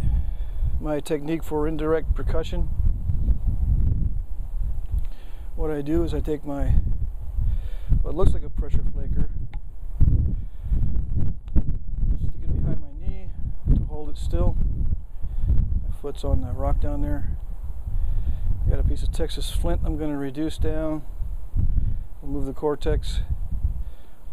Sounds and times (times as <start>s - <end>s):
Speech: 0.8s - 2.7s, 5.6s - 6.8s, 8.0s - 9.4s, 12.2s - 14.6s, 15.9s - 17.4s, 18.7s - 21.1s, 22.2s - 23.3s.